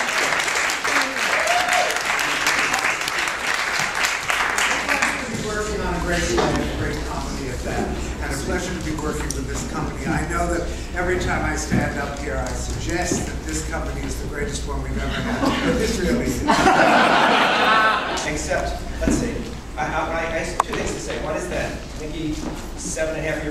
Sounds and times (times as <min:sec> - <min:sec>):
Speech: 0:04.7 - 0:16.5, 0:18.2 - 0:23.5.